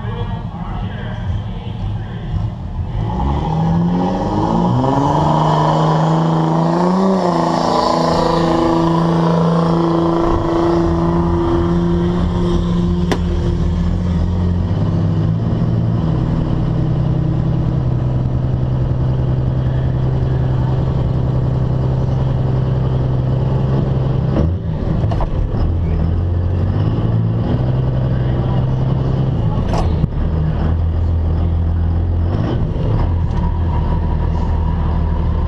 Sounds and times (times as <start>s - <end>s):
Vehicle: 0.0s - 35.4s.